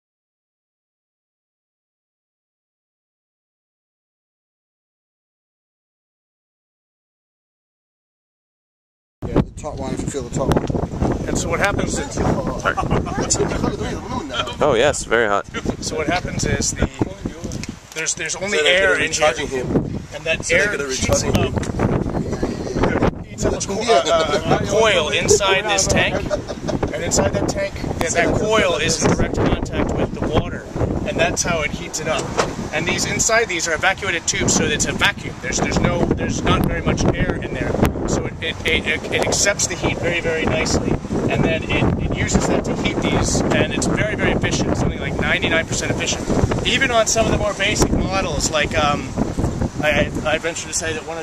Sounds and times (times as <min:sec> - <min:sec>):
Speech: 0:09.2 - 0:10.6, 0:11.3 - 0:21.6, 0:22.3 - 0:49.1, 0:49.8 - 0:51.2.